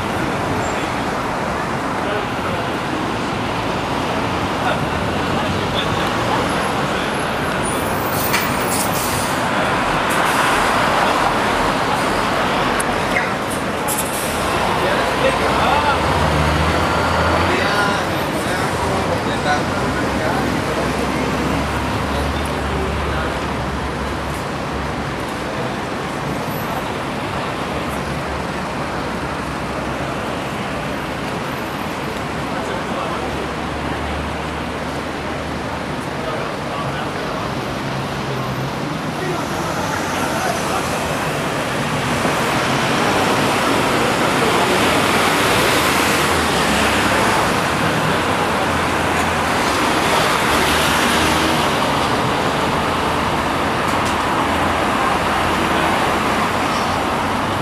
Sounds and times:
Hubbub, speech noise, speech babble: 0.0s - 57.6s
Vehicle: 0.0s - 57.6s.

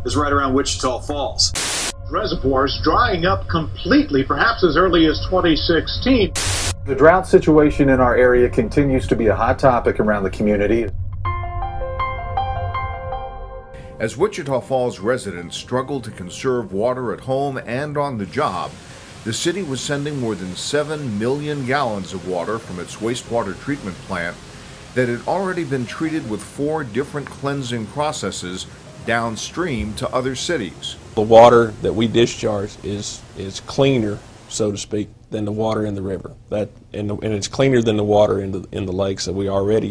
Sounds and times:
Speech: 0.0s - 10.9s, 14.0s - 24.4s, 25.0s - 39.9s
Music: 0.0s - 39.9s.

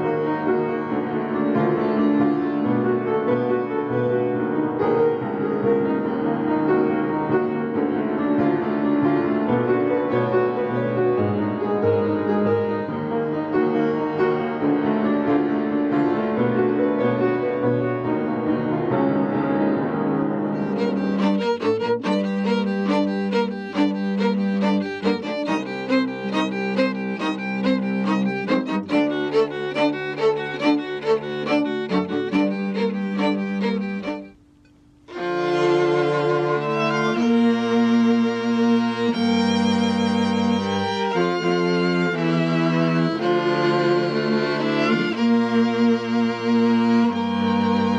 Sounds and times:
Violin, fiddle: 0.0s - 5.8s, 20.4s - 34.4s, 35.1s - 47.9s
Classical music: 0.0s - 47.9s.

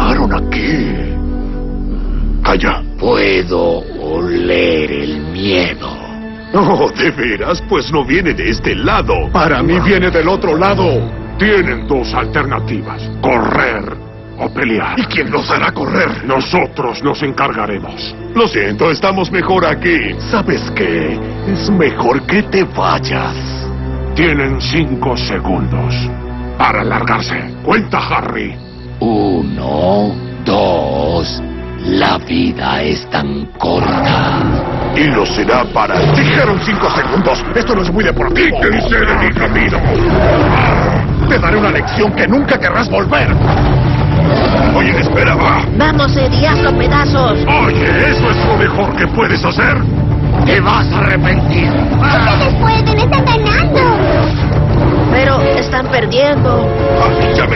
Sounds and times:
Music: 0.0s - 57.5s
Roaring cats (lions, tigers): 33.8s - 35.1s, 35.9s - 37.2s, 38.6s - 42.2s, 43.3s - 45.7s
Speech: 35.0s - 39.8s.

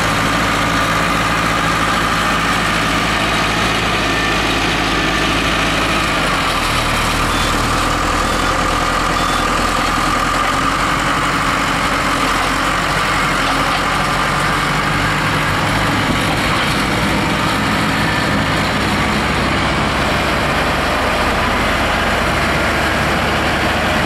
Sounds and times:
Vehicle: 0.0s - 24.0s.

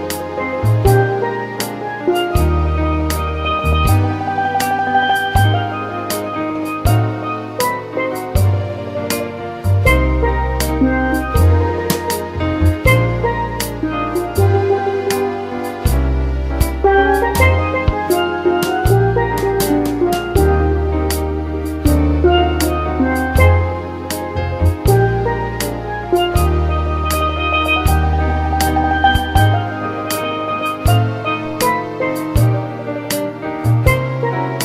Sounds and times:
Music: 0.0s - 34.6s.

